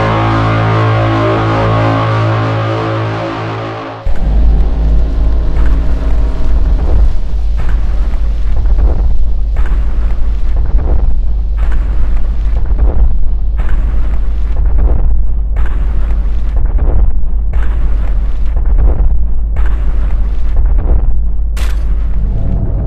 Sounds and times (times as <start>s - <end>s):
Electronic music: 0.0s - 9.7s
Boom: 0.0s - 22.8s.